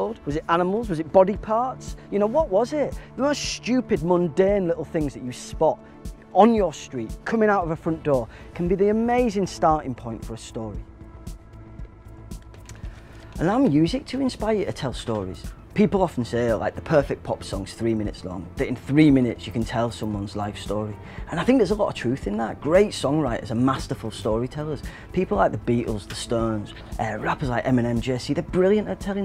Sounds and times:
Speech: 0:00.0 - 0:10.9, 0:13.4 - 0:29.2
Music: 0:00.0 - 0:29.2.

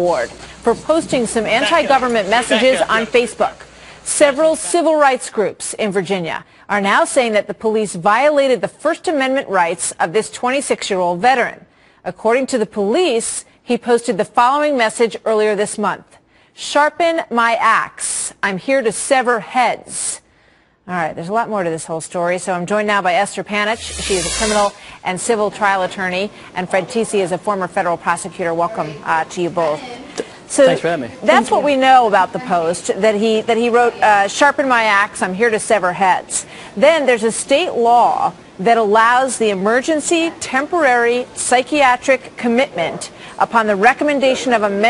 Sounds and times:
Female speech, woman speaking: 0:00.0 - 0:20.2, 0:20.9 - 0:44.9
Conversation: 0:00.0 - 0:44.9
Narration, monologue: 0:00.0 - 0:44.9
Male speech, man speaking: 0:01.6 - 0:03.5, 0:30.6 - 0:31.6.

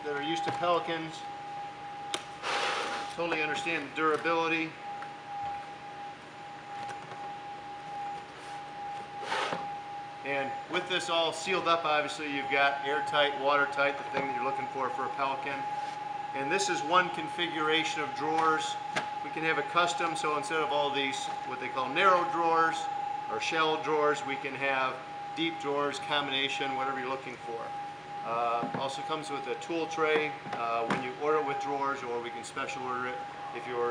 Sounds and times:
Speech: 0:00.0 - 0:01.3, 0:03.2 - 0:04.8, 0:10.3 - 0:15.7, 0:16.4 - 0:33.9.

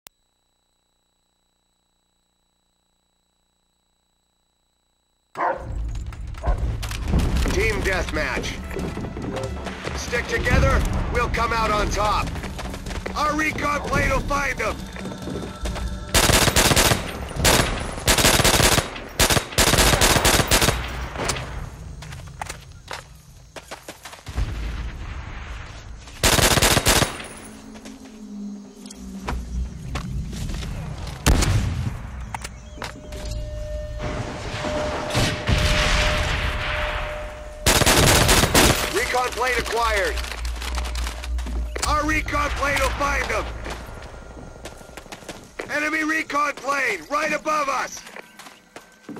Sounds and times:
Music: 0:06.4 - 0:16.2.

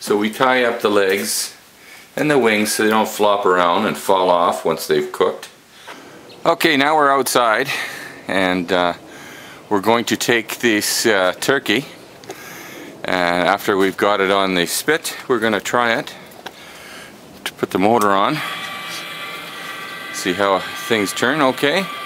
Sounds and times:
Speech: 0:00.0 - 0:01.6, 0:02.2 - 0:05.6, 0:06.4 - 0:09.0, 0:09.7 - 0:12.0, 0:13.0 - 0:16.2, 0:17.5 - 0:18.5, 0:20.2 - 0:21.9.

